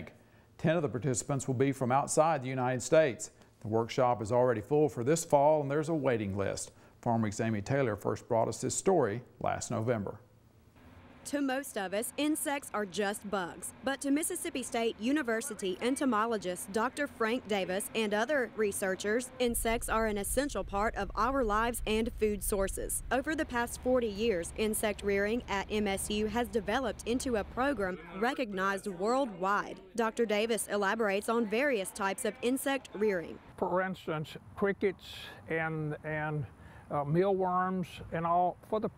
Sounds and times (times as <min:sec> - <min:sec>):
Speech: 0:00.0 - 0:10.2, 0:11.3 - 0:38.9.